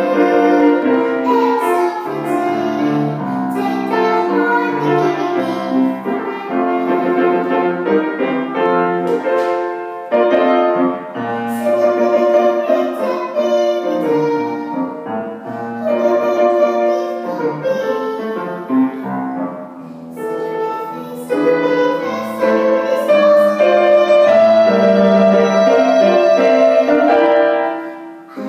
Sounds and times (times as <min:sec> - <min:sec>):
Child singing: 0:00.0 - 0:09.5, 0:11.1 - 0:19.5, 0:20.1 - 0:28.4
Music: 0:00.0 - 0:28.4.